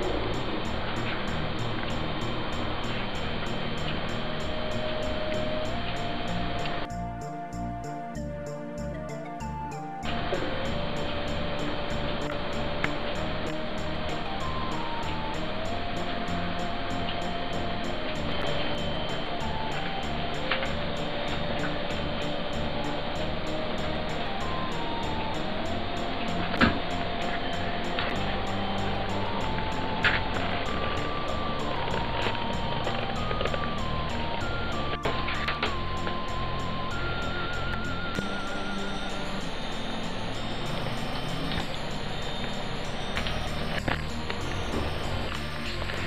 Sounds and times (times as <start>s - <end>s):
Music: 0.0s - 46.0s.